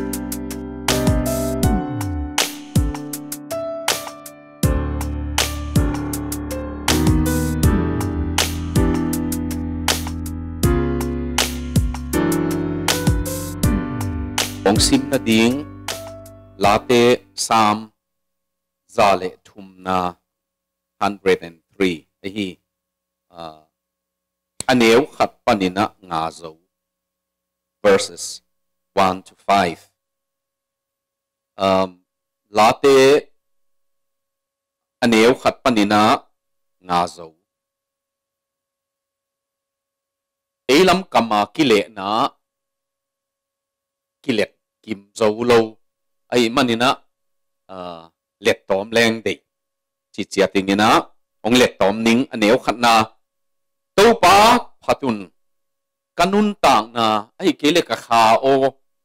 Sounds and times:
Speech: 14.7 - 15.7, 16.6 - 17.9, 18.9 - 20.2, 21.0 - 22.6, 23.3 - 23.7, 24.6 - 26.6, 27.8 - 29.9, 31.6 - 32.0, 32.6 - 33.3, 35.0 - 36.2, 36.8 - 37.4, 40.7 - 42.4, 44.3 - 47.0, 47.7 - 49.4, 50.2 - 53.2, 54.0 - 55.3, 56.2 - 58.8.

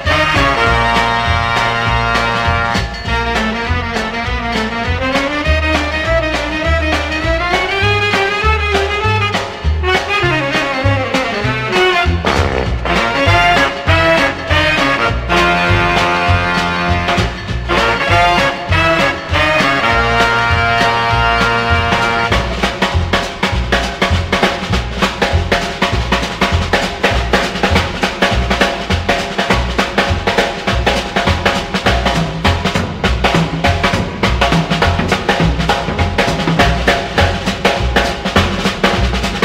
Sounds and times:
Blues: 0.0 - 39.4
Rhythm and blues: 0.0 - 39.4.

